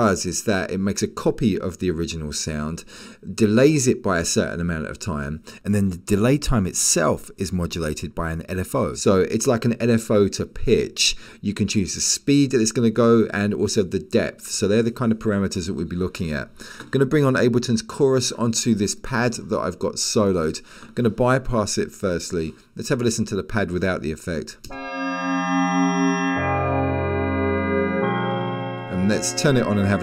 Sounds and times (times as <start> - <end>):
Speech: 0.0 - 24.7, 28.9 - 30.0.